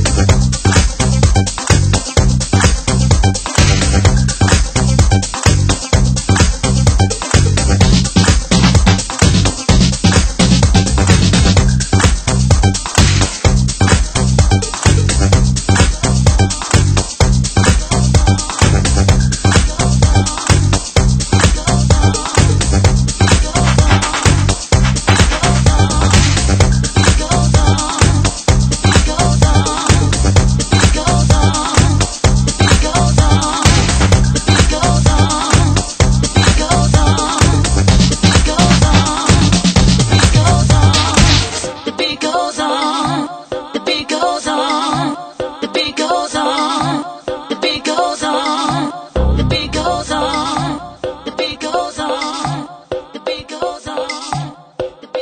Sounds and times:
Dance music: 0:00.0 - 0:55.2.

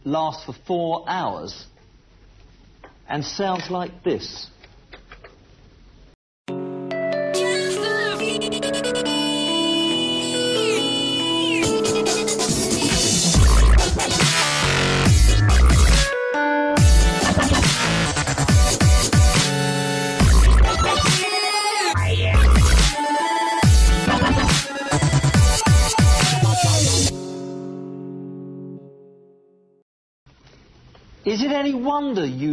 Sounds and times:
Dubstep: 0:11.4 - 0:16.1, 0:16.8 - 0:27.1.

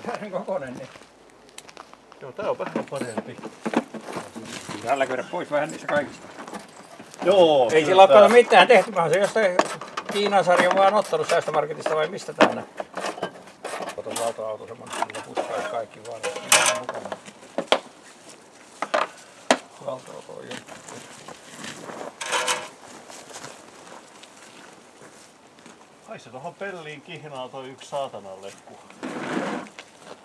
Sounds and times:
Speech: 0:00.0 - 0:01.0, 0:07.2 - 0:12.7, 0:13.9 - 0:17.2, 0:26.1 - 0:28.9.

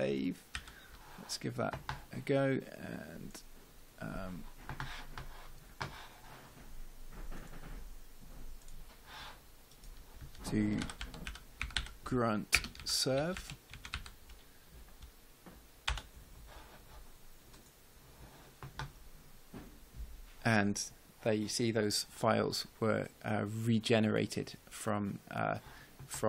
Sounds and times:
Speech: 0:00.0 - 0:00.4, 0:01.3 - 0:03.4, 0:04.0 - 0:04.5, 0:10.4 - 0:11.0, 0:12.0 - 0:13.4, 0:20.4 - 0:26.2
Typing: 0:10.4 - 0:12.0, 0:12.6 - 0:14.2.

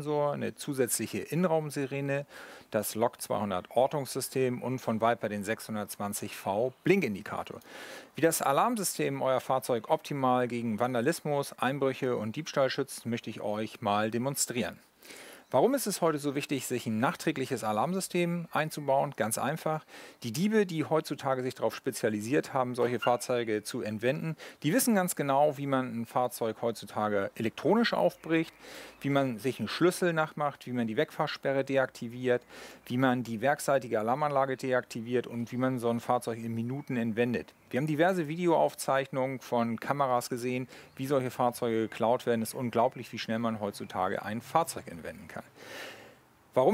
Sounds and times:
Speech: 0:00.0 - 0:07.6, 0:08.2 - 0:14.8, 0:15.5 - 0:45.5.

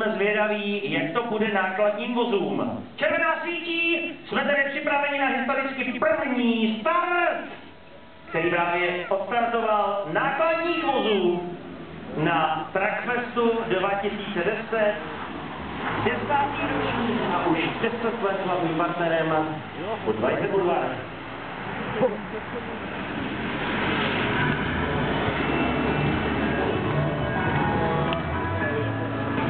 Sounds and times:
Speech: 0:00.0 - 0:07.6, 0:08.3 - 0:11.6, 0:12.2 - 0:15.0, 0:16.0 - 0:21.1
Truck: 0:13.1 - 0:29.5.

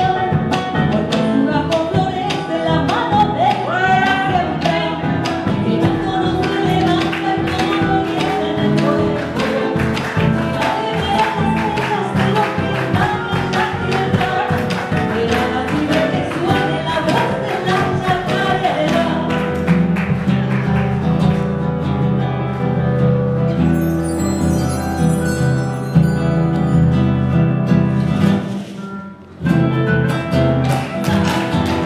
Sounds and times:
Music: 0:00.0 - 0:31.8
Singing: 0:01.0 - 0:19.4.

